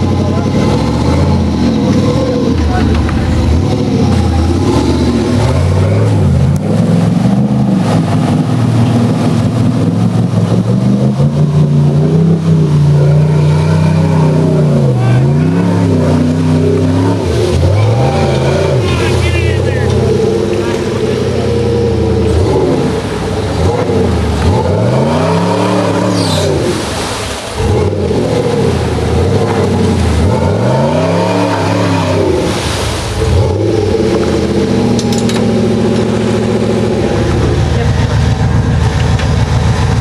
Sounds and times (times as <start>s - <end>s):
Truck: 0.0s - 40.0s
Speech: 0.1s - 0.8s, 2.2s - 3.1s, 13.7s - 16.1s, 17.7s - 21.0s.